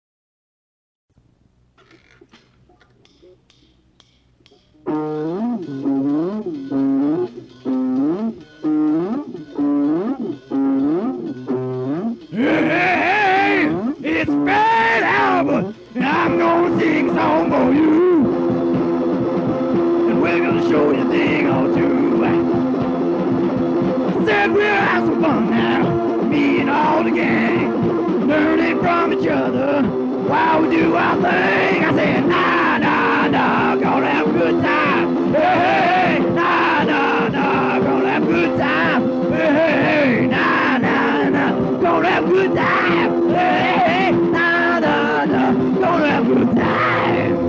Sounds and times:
Music: 1.1s - 47.4s.

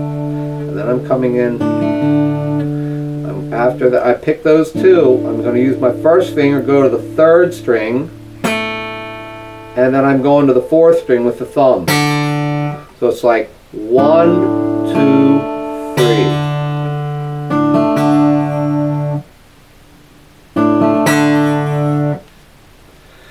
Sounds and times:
Strum: 0.0s - 13.1s, 13.8s - 19.3s, 20.5s - 22.3s
Acoustic guitar: 0.0s - 23.3s
Speech: 0.7s - 1.6s, 3.3s - 8.1s, 9.8s - 11.9s, 13.0s - 16.4s.

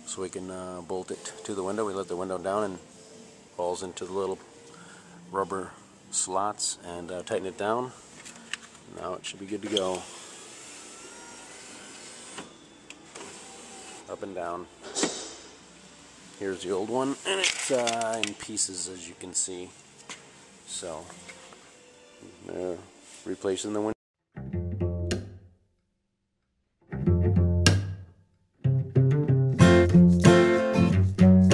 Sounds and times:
Speech: 0.1s - 2.8s, 3.6s - 4.4s, 5.3s - 8.0s, 8.9s - 10.1s, 14.1s - 14.7s, 16.4s - 19.7s, 20.7s - 21.1s, 22.4s - 24.0s.

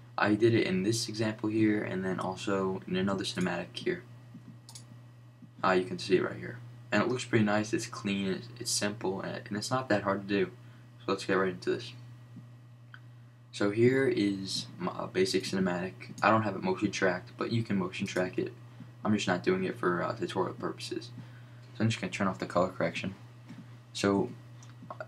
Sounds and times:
Speech: 0.2s - 4.1s, 5.6s - 12.0s, 13.6s - 21.2s, 21.8s - 23.2s, 24.0s - 25.0s.

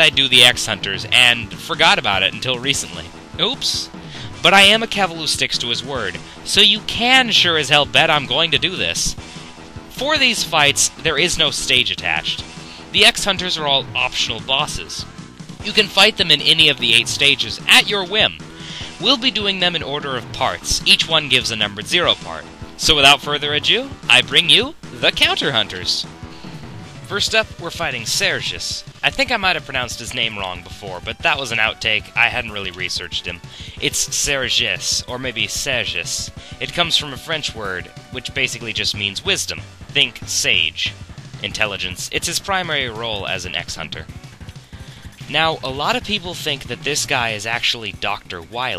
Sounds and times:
Speech: 0.0s - 9.2s, 9.9s - 26.1s, 27.1s - 44.1s, 45.2s - 48.7s.

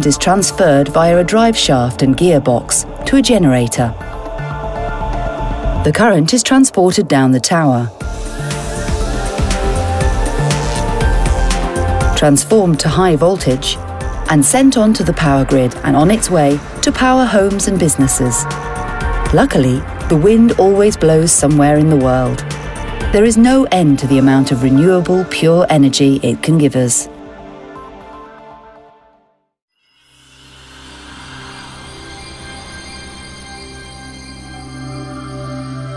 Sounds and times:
Speech: 0.0s - 4.0s, 5.8s - 8.0s, 12.2s - 18.5s, 19.3s - 22.4s, 23.1s - 27.1s
Music: 0.0s - 35.9s.

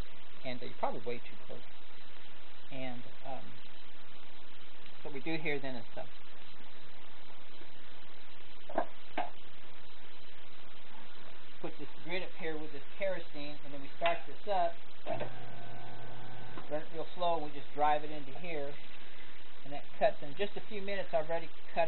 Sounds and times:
Speech: 0.4s - 1.6s, 2.7s - 3.5s, 5.0s - 6.1s, 11.6s - 14.8s, 16.7s - 18.8s, 19.7s - 21.8s.

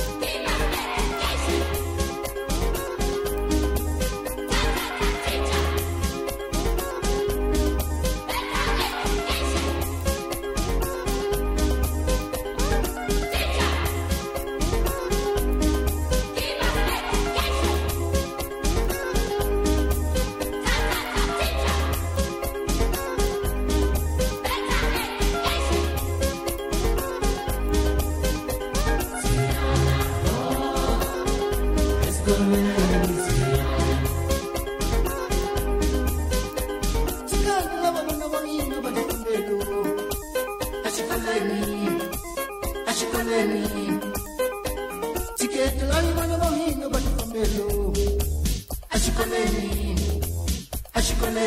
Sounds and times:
Music: 0.0s - 51.4s.

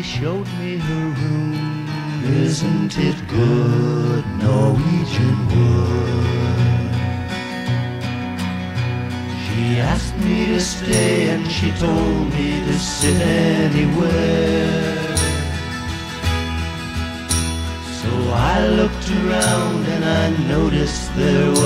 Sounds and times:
Music: 0.0s - 21.6s.

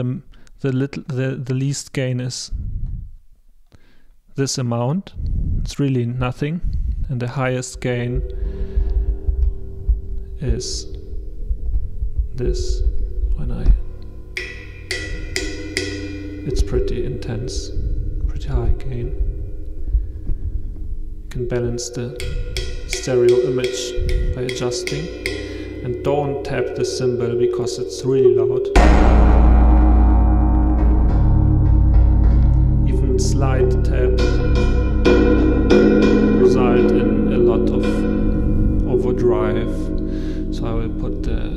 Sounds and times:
Speech: 0.0s - 2.6s, 4.4s - 8.3s, 10.4s - 10.9s, 12.4s - 13.8s, 16.5s - 19.2s, 21.3s - 22.3s, 22.9s - 25.2s, 25.8s - 28.8s, 32.8s - 34.5s, 36.4s - 38.2s, 38.8s - 41.5s
Reverberation: 7.5s - 41.5s
Cymbal: 7.8s - 41.5s
Drum kit: 11.8s - 18.9s, 21.3s - 28.0s, 28.7s - 41.5s.

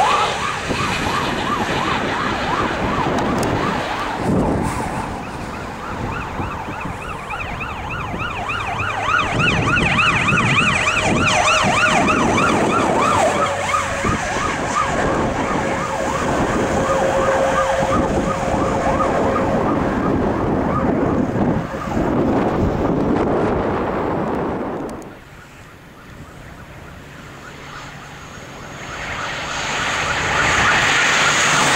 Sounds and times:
Emergency vehicle: 0.0s - 31.7s
Truck: 0.0s - 31.7s.

